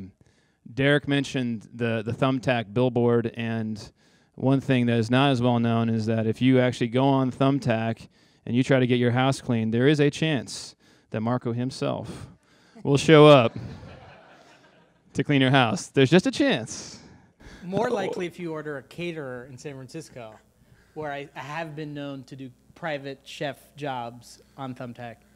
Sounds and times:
Speech: 0.7s - 13.6s, 15.2s - 17.0s, 17.6s - 20.4s, 21.0s - 25.2s.

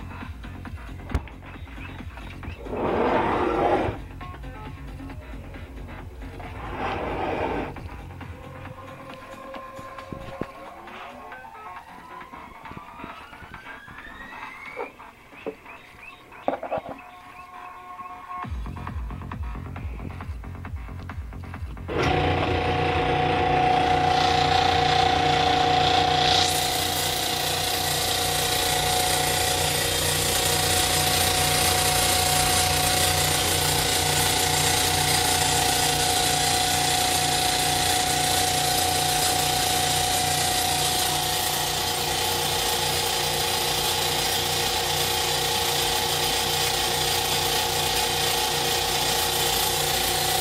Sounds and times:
Music: 0.0s - 47.0s.

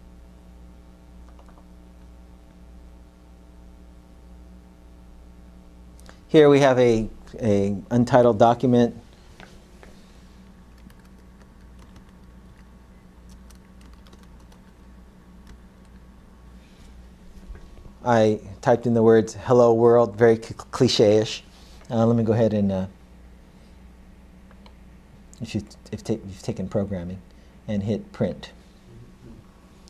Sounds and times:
Computer keyboard: 1.3s - 1.7s, 10.7s - 12.7s, 13.3s - 14.8s
Speech: 6.3s - 9.0s, 18.0s - 23.0s, 25.4s - 29.4s.

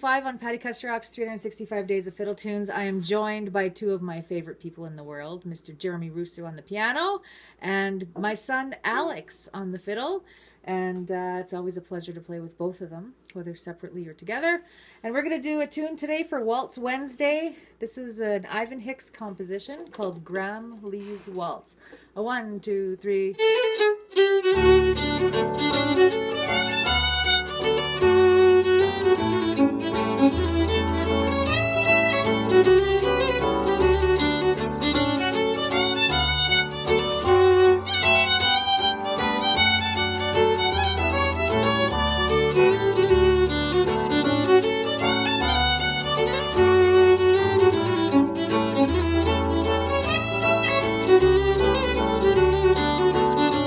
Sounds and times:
Violin, fiddle: 23.3s - 53.6s.

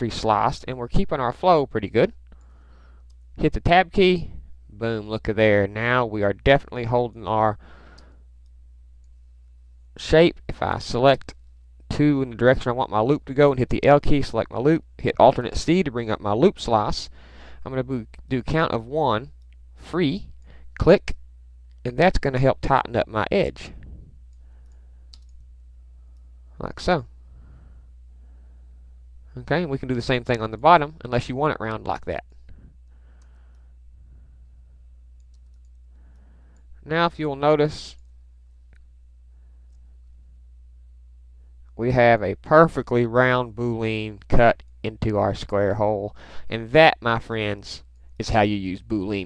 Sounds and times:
Speech: 0.0s - 2.2s, 3.4s - 7.6s, 10.0s - 21.2s, 21.8s - 23.8s, 26.6s - 27.1s, 29.3s - 32.3s, 36.8s - 38.0s, 41.8s - 49.2s
Silence: 23.6s - 29.6s, 32.2s - 36.9s.

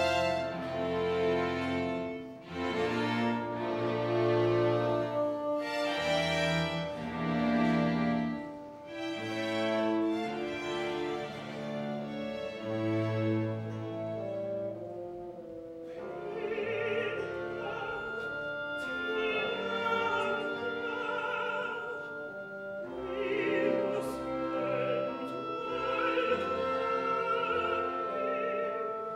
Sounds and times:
Opera: 0.0s - 29.1s.

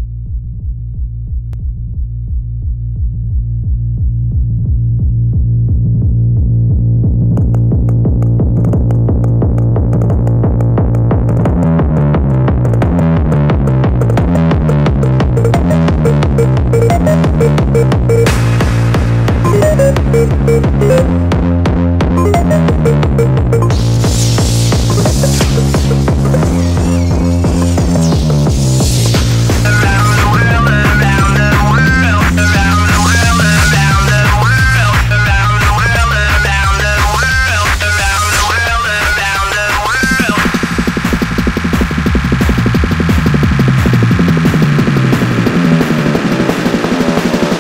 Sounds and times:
Techno: 5.6s - 47.6s.

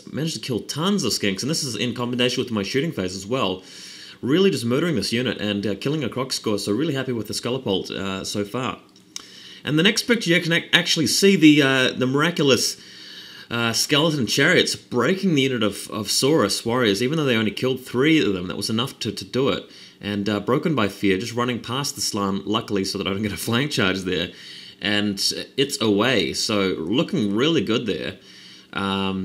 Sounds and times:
Speech: 0.0s - 3.6s, 4.2s - 8.9s, 9.6s - 12.8s, 13.5s - 29.2s.

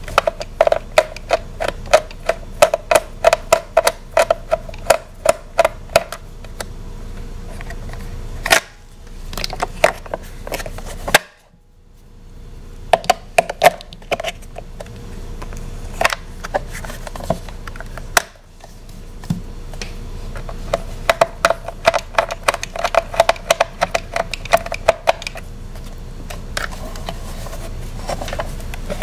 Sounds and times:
Inside, small room: 0.0s - 29.0s.

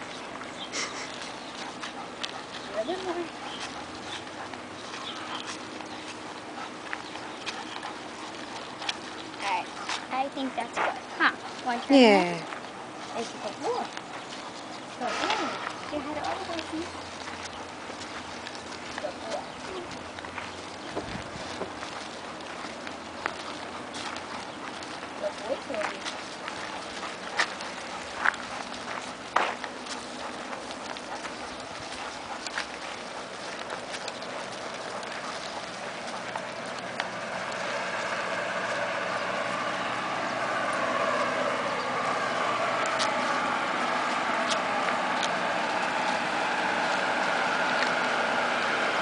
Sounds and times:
Speech: 2.7s - 3.4s, 19.0s - 19.9s, 25.2s - 26.1s.

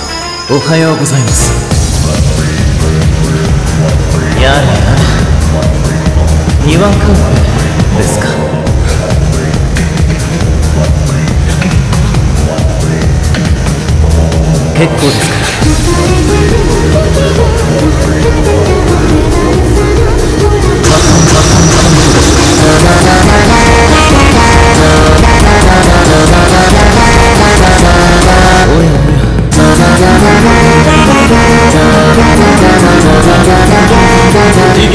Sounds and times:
Music: 0.0s - 34.9s.

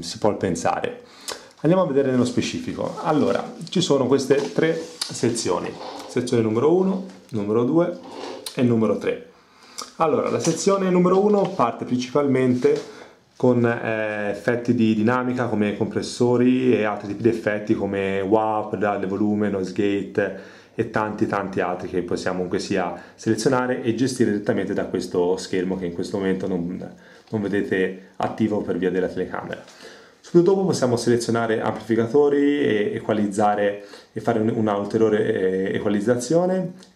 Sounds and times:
Speech: 0.0s - 36.9s.

